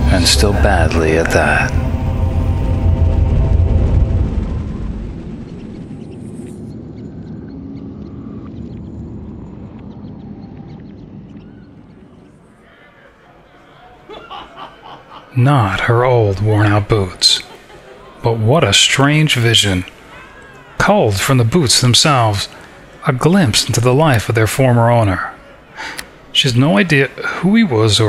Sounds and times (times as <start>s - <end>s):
Speech: 0.0s - 1.8s, 15.3s - 17.5s, 18.2s - 19.9s, 20.8s - 25.4s, 26.3s - 28.0s.